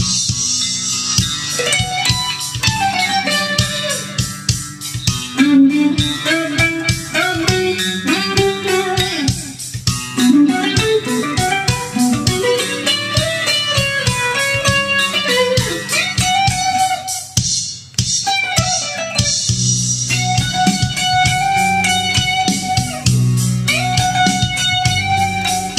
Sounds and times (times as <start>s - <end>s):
Electric guitar: 0.0s - 25.7s
Strum: 0.0s - 25.7s.